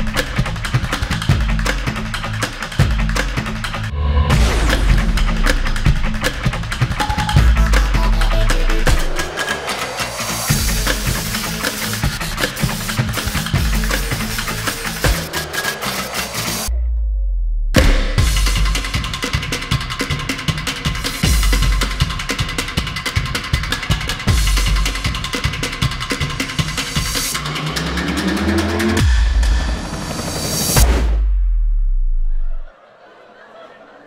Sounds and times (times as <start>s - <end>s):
Percussion: 0.0s - 32.2s.